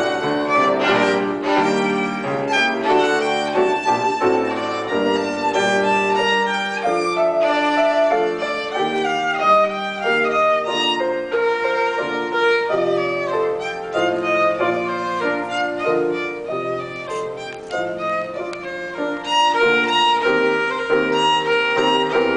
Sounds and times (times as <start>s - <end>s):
Violin, fiddle: 0.0s - 22.3s.